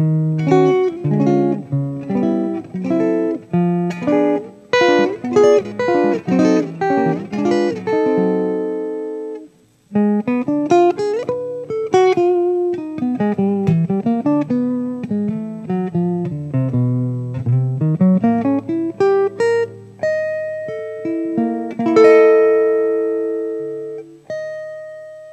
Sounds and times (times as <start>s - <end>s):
Strum: 0.0s - 25.2s
Acoustic guitar: 0.0s - 25.3s.